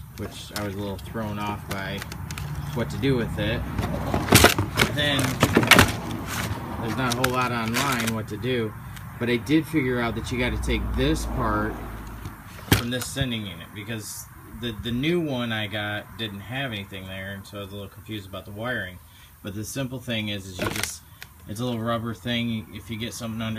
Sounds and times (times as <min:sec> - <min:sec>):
Speech: 0:00.2 - 0:02.0, 0:02.7 - 0:03.7, 0:04.8 - 0:05.5, 0:06.8 - 0:11.8, 0:12.8 - 0:23.5.